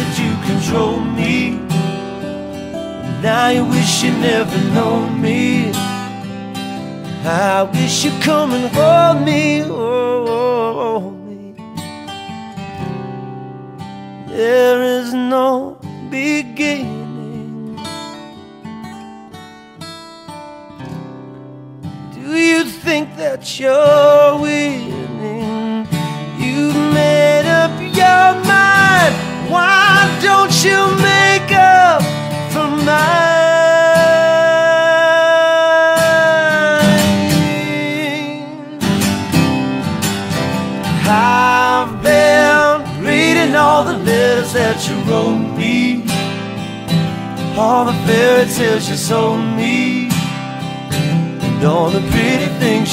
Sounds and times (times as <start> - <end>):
Acoustic guitar: 0.0 - 52.9.